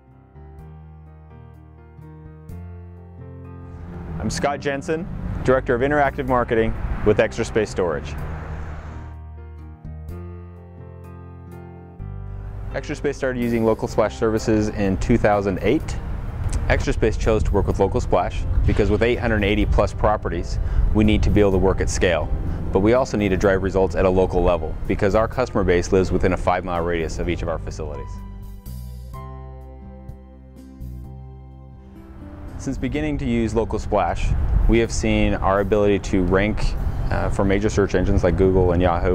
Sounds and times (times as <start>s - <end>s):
Music: 0.0s - 39.1s
Speech: 4.2s - 8.2s, 12.8s - 16.0s, 16.7s - 28.2s, 32.6s - 39.1s.